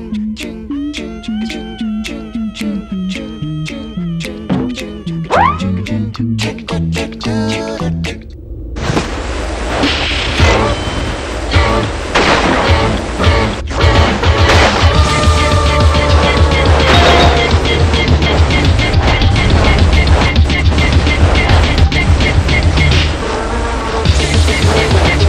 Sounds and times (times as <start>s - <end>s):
Music: 0.0s - 8.4s, 10.4s - 25.2s.